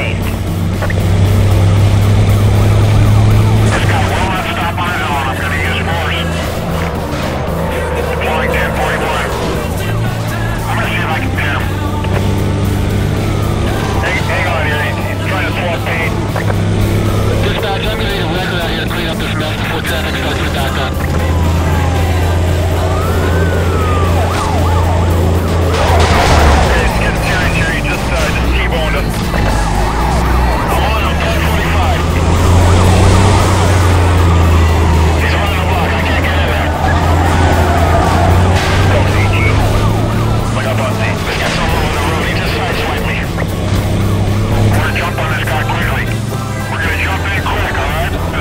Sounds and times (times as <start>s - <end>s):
Music: 0.0s - 48.4s
Vehicle: 0.0s - 48.4s
Speech: 3.7s - 6.4s, 7.7s - 12.0s, 13.7s - 16.2s, 17.4s - 21.1s, 26.6s - 29.2s, 30.6s - 32.3s, 35.2s - 37.0s, 38.8s - 43.4s, 44.7s - 48.4s.